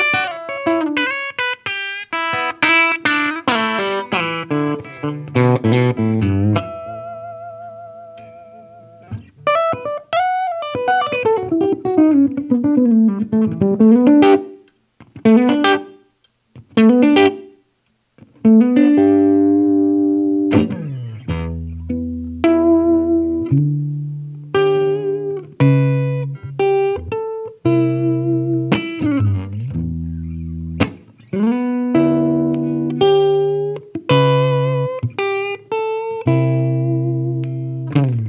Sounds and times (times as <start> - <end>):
Strum: 18.4 - 38.2.